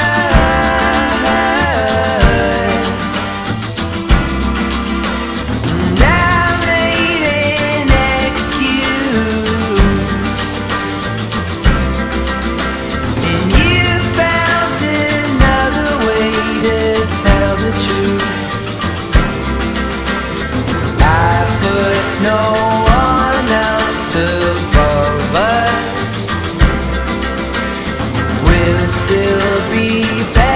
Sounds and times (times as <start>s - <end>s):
Blues: 0.0s - 30.5s.